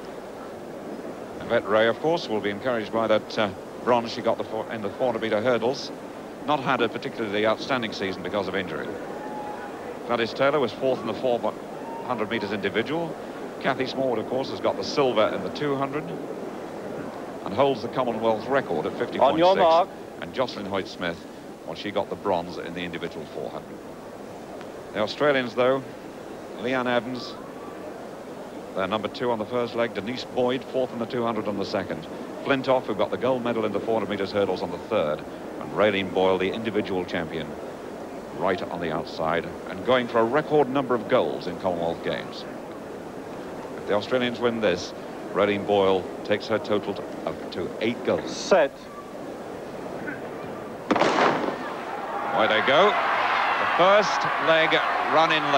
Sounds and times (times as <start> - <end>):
Outside, urban or manmade: 0.0 - 55.5
Speech: 1.4 - 5.9, 6.5 - 9.0, 10.0 - 16.2, 17.4 - 23.7, 25.0 - 25.9, 26.6 - 27.4, 28.8 - 37.5, 38.4 - 42.5, 43.8 - 48.9, 52.4 - 53.0, 53.7 - 55.5.